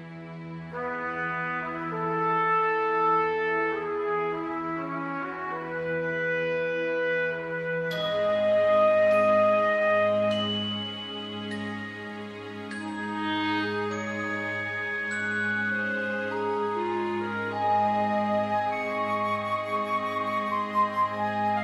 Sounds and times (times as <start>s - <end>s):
Tender music: 0.0s - 21.6s.